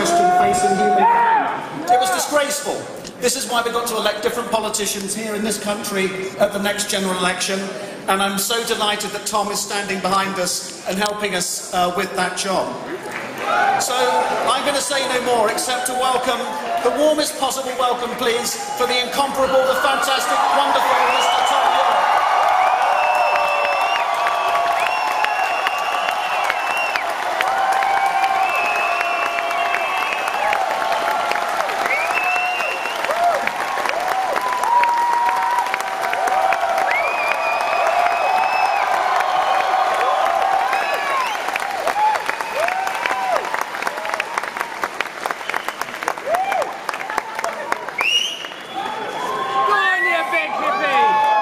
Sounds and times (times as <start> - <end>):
Speech: 0.0 - 1.2, 1.8 - 12.8, 13.8 - 21.9.